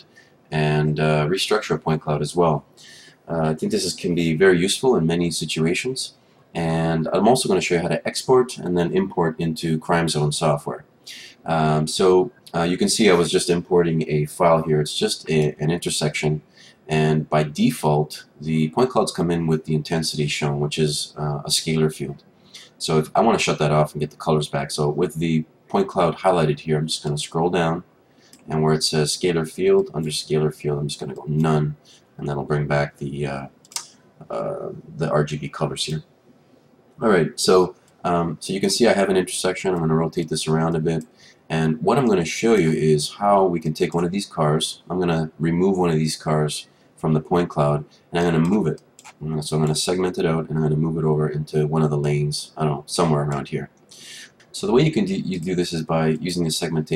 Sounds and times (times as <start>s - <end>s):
Speech: 0.0s - 36.1s, 37.0s - 56.9s.